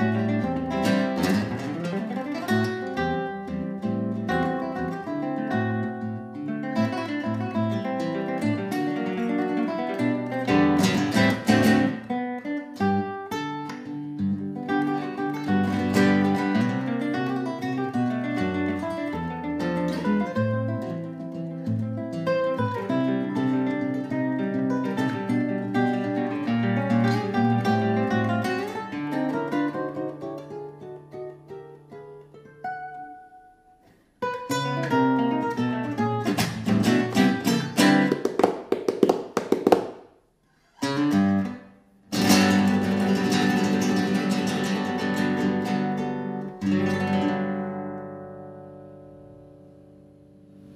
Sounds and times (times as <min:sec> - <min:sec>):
Acoustic guitar: 0:00.0 - 0:50.7.